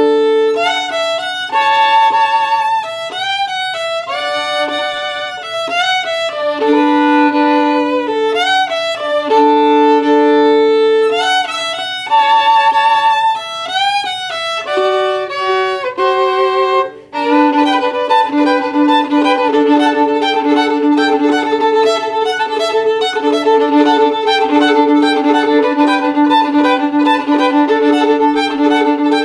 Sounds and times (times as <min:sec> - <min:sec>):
Violin, fiddle: 0:00.0 - 0:29.2.